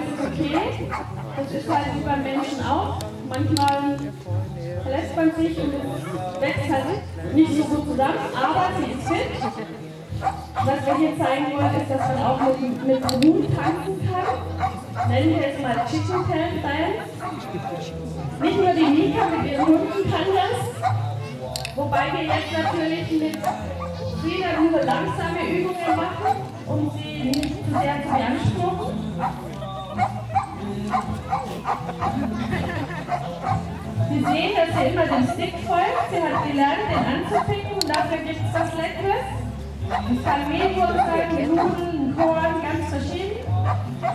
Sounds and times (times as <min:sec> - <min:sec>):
Music: 0:00.0 - 0:44.1.